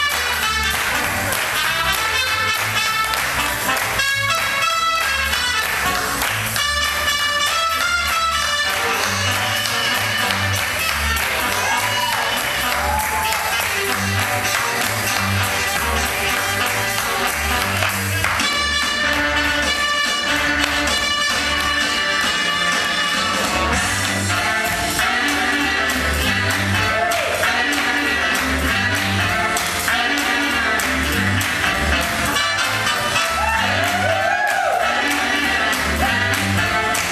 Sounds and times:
Music: 0.0s - 37.1s.

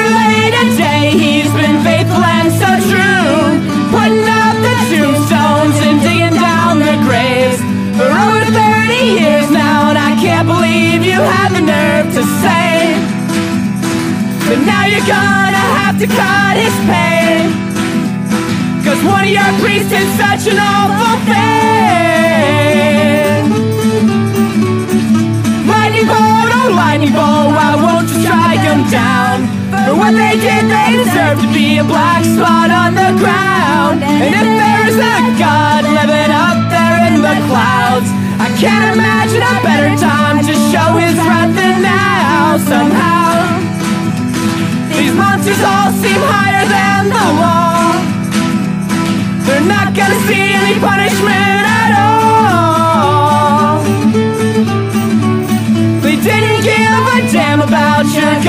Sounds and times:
Music: 0.0s - 58.4s.

